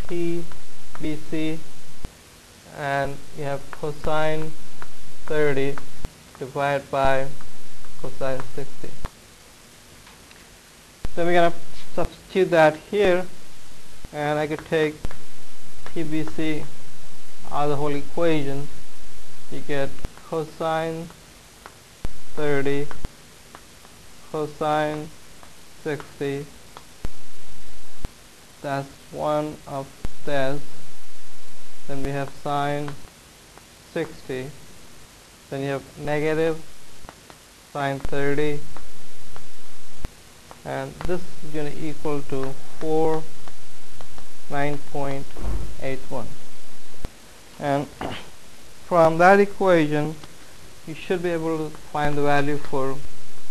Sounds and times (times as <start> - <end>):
Speech: 0.0 - 1.6, 2.7 - 4.6, 5.3 - 5.8, 6.4 - 7.4, 8.0 - 9.0, 11.2 - 13.3, 14.1 - 15.0, 16.0 - 16.7, 17.5 - 18.7, 19.5 - 21.1, 22.4 - 22.9, 24.3 - 25.1, 25.9 - 26.5, 28.6 - 30.6, 31.9 - 33.0, 33.9 - 34.6, 35.5 - 36.6, 37.8 - 38.6, 40.7 - 43.3, 44.5 - 46.3, 47.6 - 48.3, 48.9 - 50.2, 50.9 - 53.0.